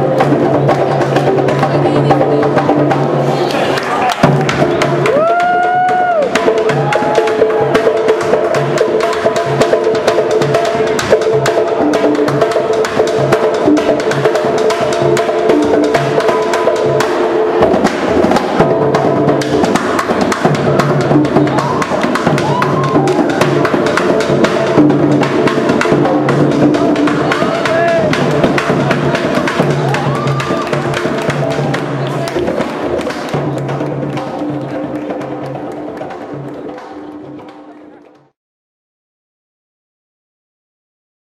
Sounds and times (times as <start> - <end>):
Drum: 0.0 - 38.4
Inside, large room or hall: 0.0 - 38.4.